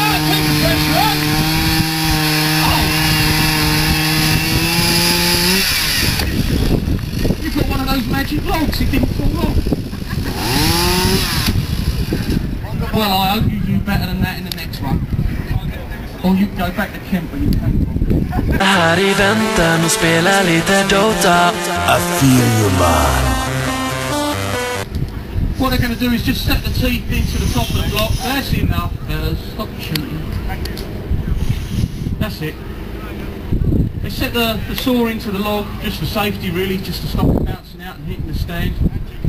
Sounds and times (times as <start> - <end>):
Sawing: 0.0 - 6.3.